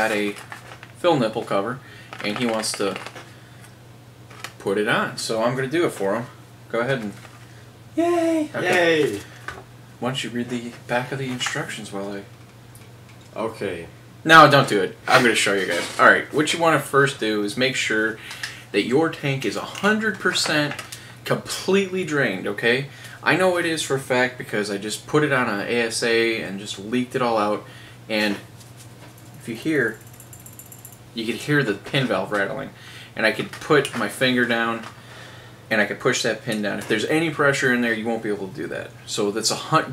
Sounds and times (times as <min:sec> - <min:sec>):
Speech: 0:00.0 - 0:00.4, 0:01.0 - 0:03.0, 0:04.6 - 0:07.2, 0:08.0 - 0:09.3, 0:10.0 - 0:12.3, 0:13.4 - 0:28.5, 0:29.4 - 0:30.0, 0:31.2 - 0:34.9, 0:35.7 - 0:39.9.